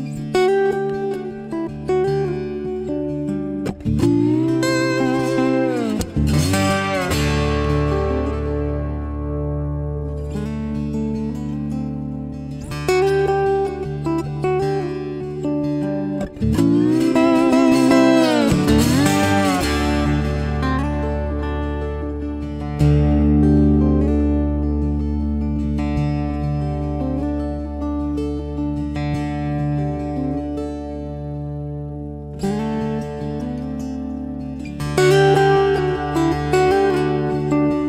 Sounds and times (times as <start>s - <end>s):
Acoustic guitar: 0.0s - 37.8s
Steel guitar, slide guitar: 0.0s - 37.8s.